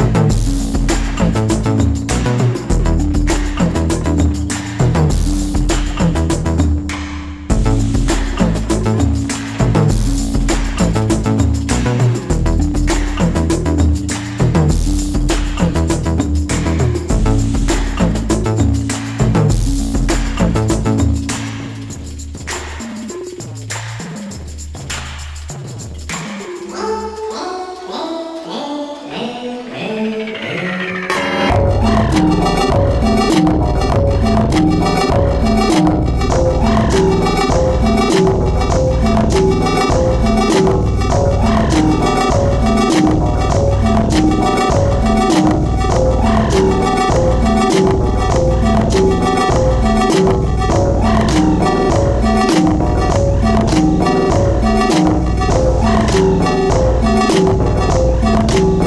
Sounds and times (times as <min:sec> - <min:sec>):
Music: 0:00.0 - 0:58.8.